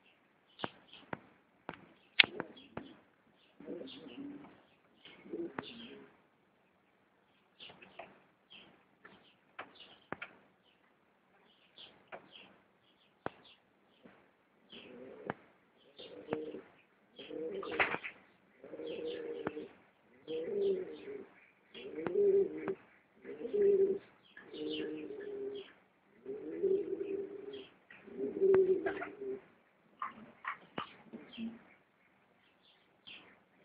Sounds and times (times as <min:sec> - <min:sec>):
Pigeon, dove: 0:01.8 - 0:06.2, 0:13.3 - 0:31.8.